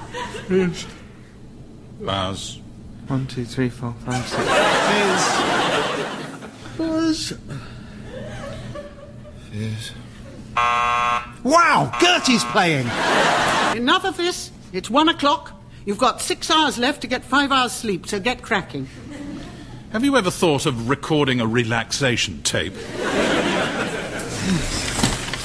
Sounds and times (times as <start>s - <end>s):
Alarm: 10.6s - 13.3s.